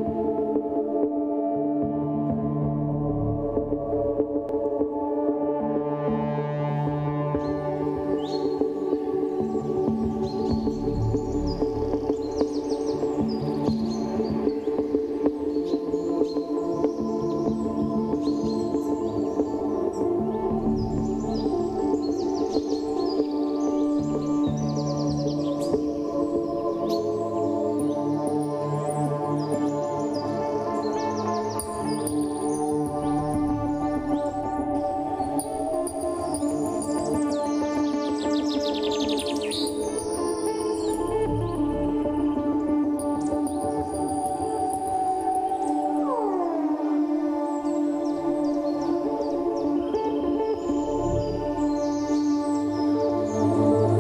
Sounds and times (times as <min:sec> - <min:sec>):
Music: 0:00.0 - 0:54.0
Bird: 0:07.4 - 0:46.3.